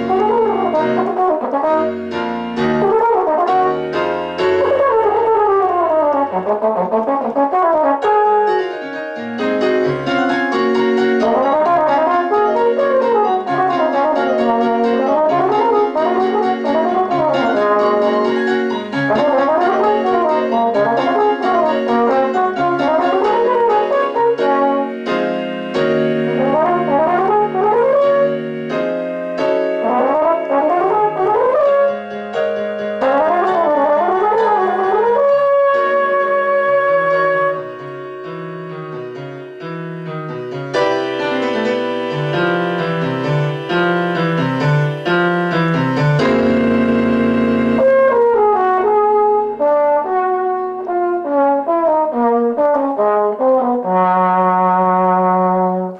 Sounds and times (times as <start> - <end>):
Brass instrument: 0.0 - 55.9
Piano: 0.0 - 55.9.